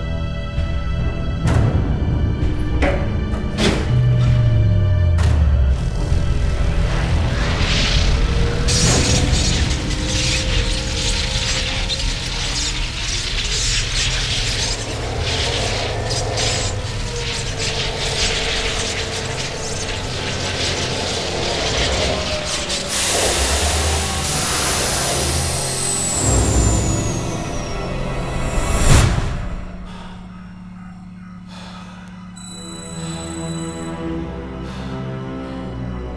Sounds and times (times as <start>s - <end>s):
Music: 0.0s - 36.1s
Sound effect: 5.2s - 31.3s.